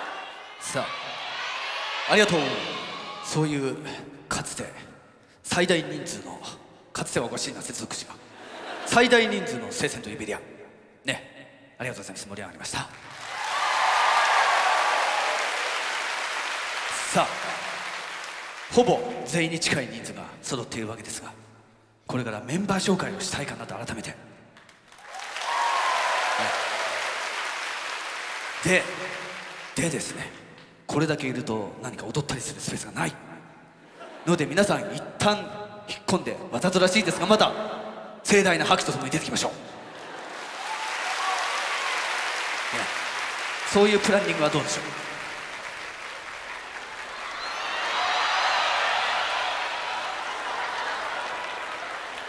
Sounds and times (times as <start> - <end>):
Speech: 0.6 - 0.9, 2.1 - 8.2, 8.9 - 10.5, 11.1 - 13.0, 16.9 - 17.5, 18.7 - 21.4, 22.1 - 24.2, 28.6 - 29.0, 29.8 - 33.3, 34.2 - 39.6, 43.7 - 45.0
Applause: 12.9 - 19.4, 24.6 - 30.4, 39.9 - 52.2.